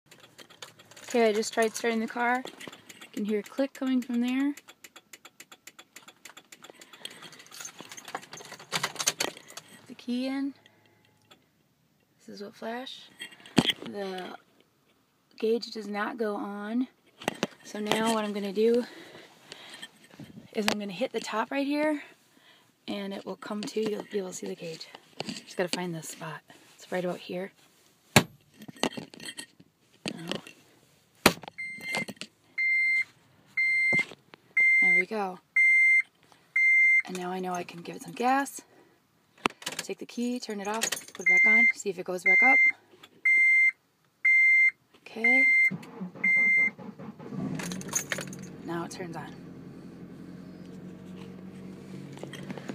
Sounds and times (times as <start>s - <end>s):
Speech: 1.1s - 2.4s, 3.2s - 4.6s, 9.9s - 10.6s, 12.2s - 13.1s, 13.9s - 14.4s, 15.4s - 16.9s, 17.7s - 18.9s, 20.6s - 22.1s, 22.9s - 24.9s, 25.6s - 27.5s, 34.8s - 35.4s, 37.1s - 38.6s, 39.8s - 42.6s, 45.0s - 45.5s, 48.7s - 49.4s.